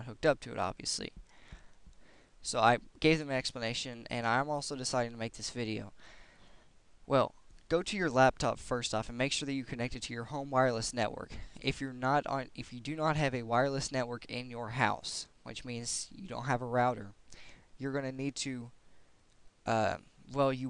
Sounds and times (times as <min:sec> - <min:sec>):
Speech: 0:00.0 - 0:01.2, 0:02.4 - 0:06.0, 0:07.1 - 0:17.2, 0:17.8 - 0:18.8, 0:19.7 - 0:20.7.